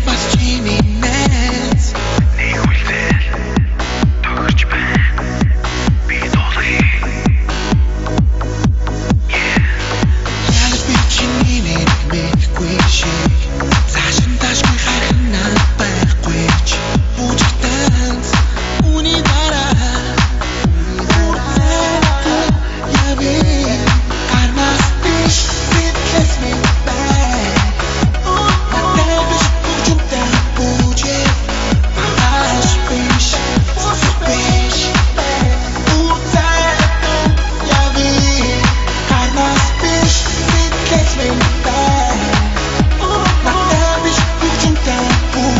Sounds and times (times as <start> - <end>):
Pop music: 0.0 - 45.5.